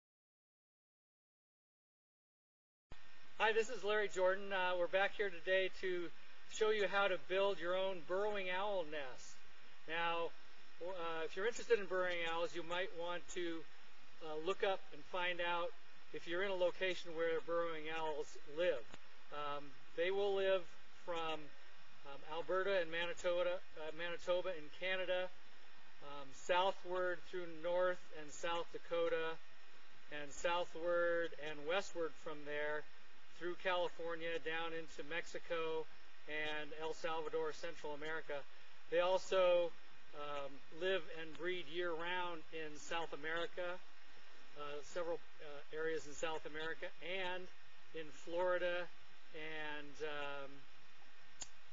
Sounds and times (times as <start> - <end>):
Speech: 3.4 - 21.5, 22.1 - 25.4, 26.0 - 29.4, 30.1 - 43.8, 44.6 - 50.6.